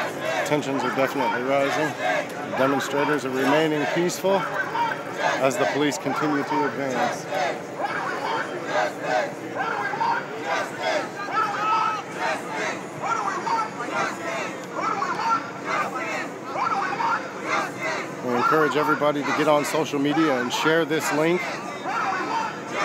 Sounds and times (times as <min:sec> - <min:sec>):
Speech: 0:00.4 - 0:07.2, 0:18.2 - 0:22.5.